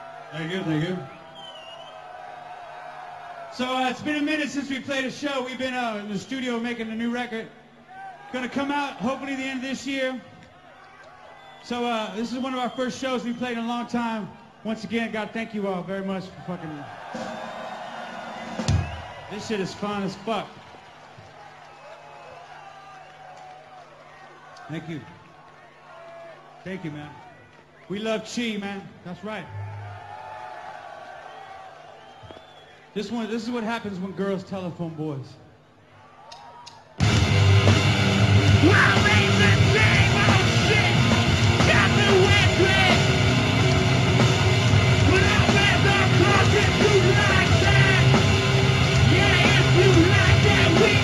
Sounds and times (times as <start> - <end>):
Speech: 0.4 - 1.1, 3.6 - 7.5, 8.4 - 10.3, 11.6 - 16.9, 19.3 - 20.5, 24.7 - 25.2, 26.7 - 27.2, 27.9 - 29.5, 33.0 - 35.4
Music: 17.1 - 19.1, 37.0 - 51.0.